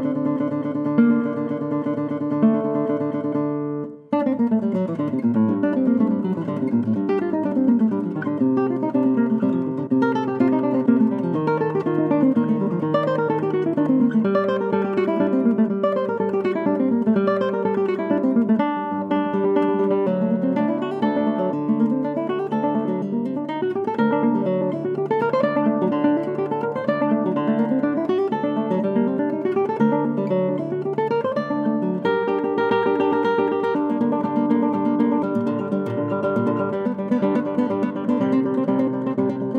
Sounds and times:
Guitar: 0:00.0 - 0:39.5.

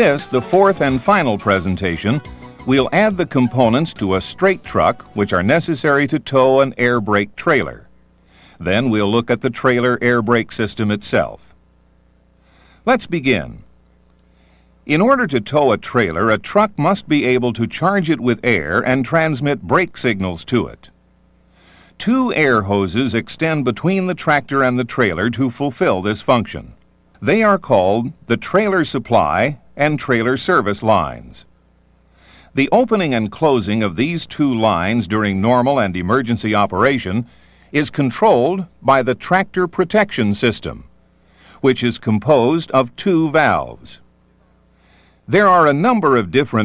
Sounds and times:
Speech: 0:00.0 - 0:07.9, 0:08.6 - 0:11.6, 0:12.8 - 0:13.7, 0:14.9 - 0:20.9, 0:22.0 - 0:31.5, 0:32.6 - 0:40.9, 0:41.6 - 0:44.1, 0:45.3 - 0:46.6.

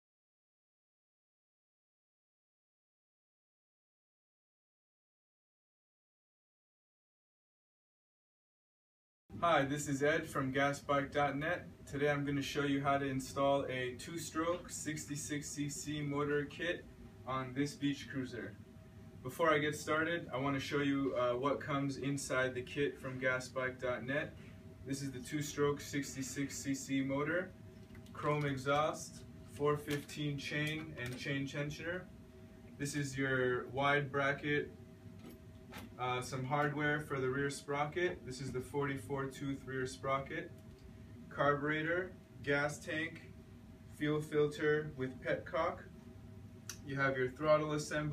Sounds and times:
Speech: 0:09.3 - 0:18.6, 0:19.2 - 0:32.1, 0:32.8 - 0:34.8, 0:36.0 - 0:40.6, 0:41.3 - 0:46.0, 0:46.7 - 0:48.1.

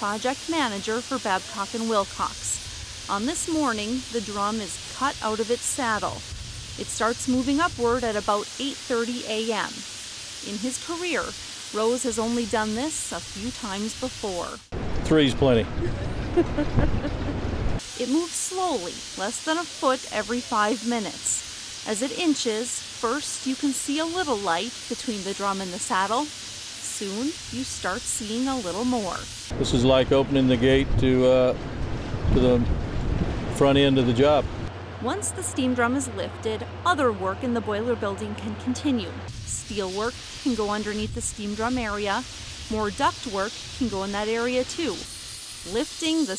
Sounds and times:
Speech: 0:00.0 - 0:06.2, 0:06.8 - 0:09.8, 0:10.4 - 0:16.0, 0:18.0 - 0:26.3, 0:26.9 - 0:31.6, 0:32.3 - 0:32.7, 0:33.6 - 0:45.1, 0:45.7 - 0:46.3.

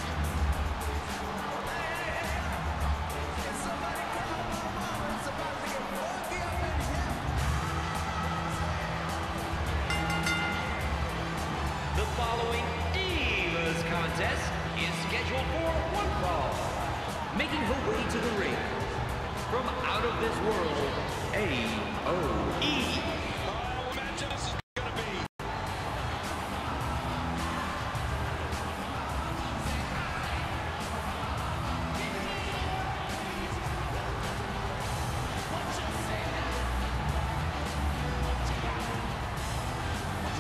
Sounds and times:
Music: 0:00.0 - 0:40.4
Speech: 0:03.4 - 0:07.3, 0:12.0 - 0:25.3, 0:35.4 - 0:36.7.

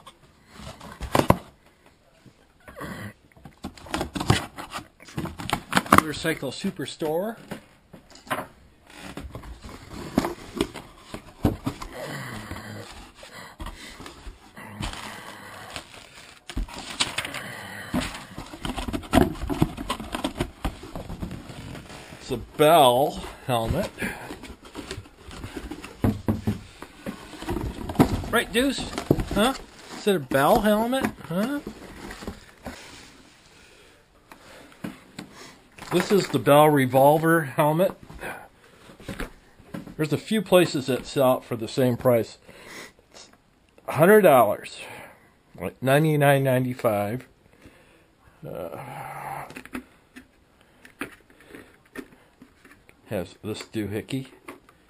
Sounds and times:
Speech: 0:05.9 - 0:07.4, 0:22.2 - 0:24.0, 0:28.3 - 0:31.7, 0:35.9 - 0:38.0, 0:40.0 - 0:42.4, 0:43.9 - 0:45.0, 0:45.6 - 0:47.3, 0:53.1 - 0:54.4.

